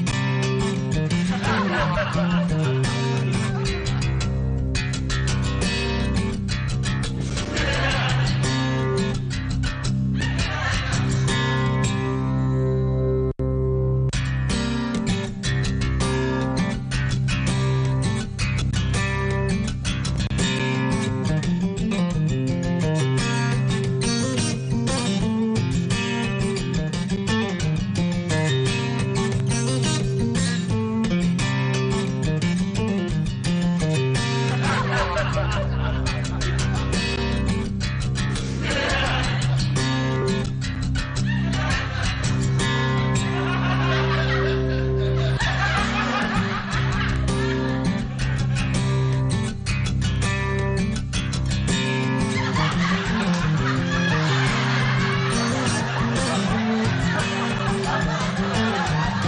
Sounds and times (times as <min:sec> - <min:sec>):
Music: 0:00.0 - 0:59.2.